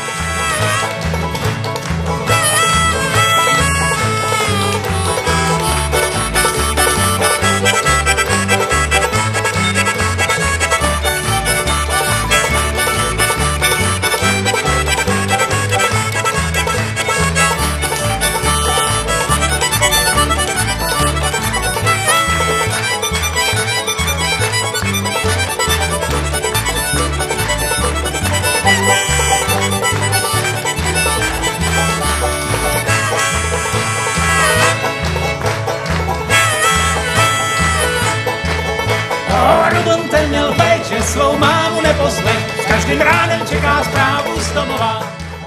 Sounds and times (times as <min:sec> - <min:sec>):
Music: 0:00.0 - 0:45.4.